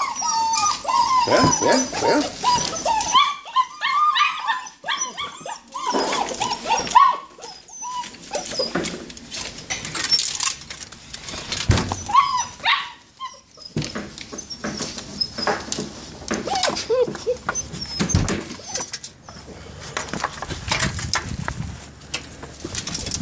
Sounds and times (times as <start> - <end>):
Whimper (dog): 0.0 - 8.9, 11.9 - 13.8, 16.4 - 19.5.